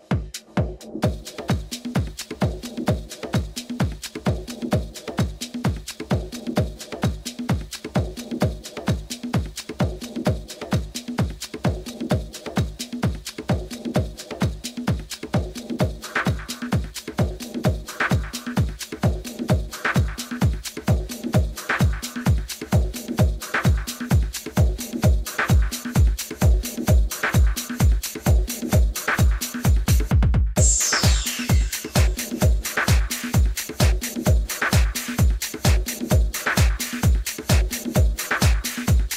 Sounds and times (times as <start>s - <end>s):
Music: 0.0s - 39.1s.